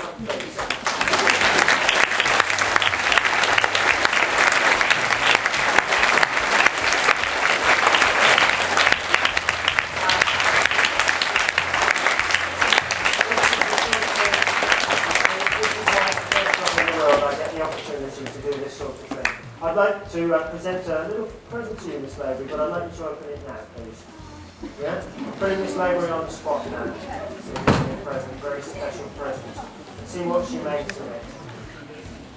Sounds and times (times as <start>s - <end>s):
Applause: 0.1s - 19.5s.